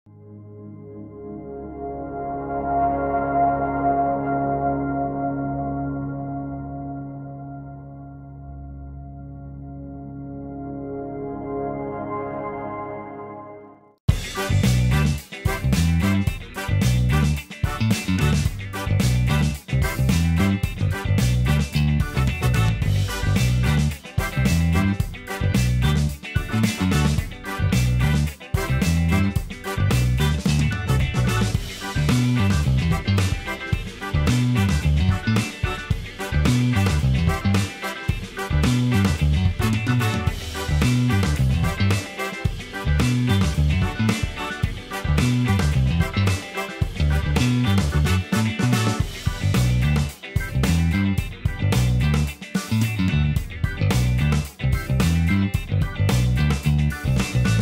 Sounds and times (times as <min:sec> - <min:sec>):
Ambient music: 0:00.1 - 0:49.9.